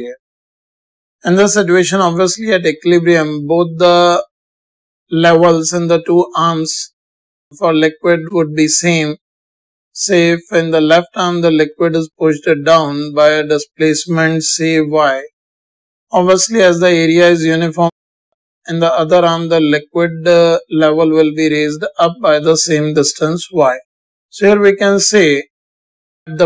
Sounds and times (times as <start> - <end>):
Speech: 0.0 - 0.2, 1.3 - 4.3, 5.1 - 6.9, 7.6 - 9.2, 10.0 - 15.3, 16.2 - 18.0, 18.7 - 23.8, 24.4 - 25.5.